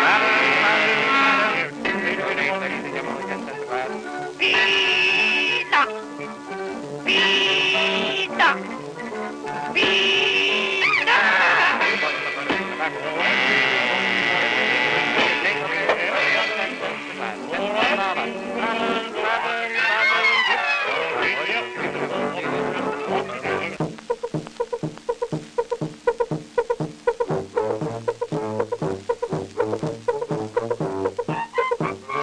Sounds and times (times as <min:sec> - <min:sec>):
Speech: 0:00.0 - 0:06.0, 0:07.1 - 0:08.7, 0:21.2 - 0:23.8
Music: 0:00.0 - 0:32.2.